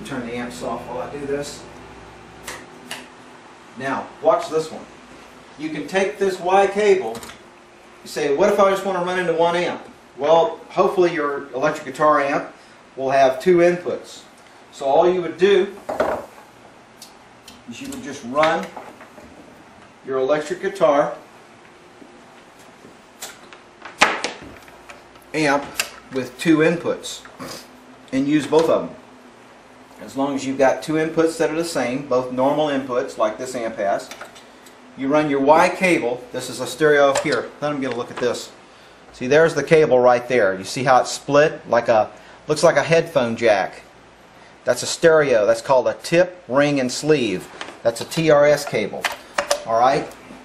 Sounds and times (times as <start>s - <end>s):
Speech: 0.0s - 1.7s, 3.8s - 5.0s, 5.6s - 7.3s, 8.0s - 15.8s, 17.6s - 18.8s, 20.0s - 21.2s, 25.3s - 27.3s, 28.1s - 29.0s, 30.0s - 34.2s, 35.0s - 43.9s, 44.6s - 50.2s.